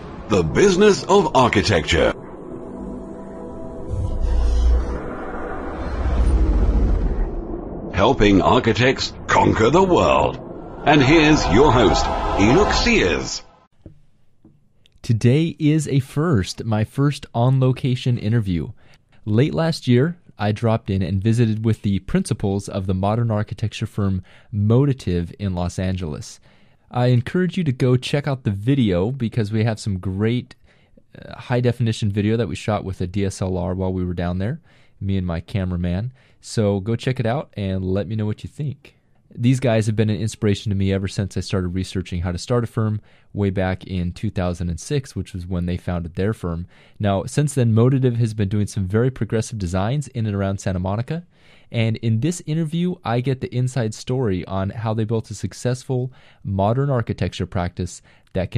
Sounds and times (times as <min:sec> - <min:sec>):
Speech: 0:00.3 - 0:02.2, 0:08.0 - 0:13.5, 0:15.0 - 0:58.5.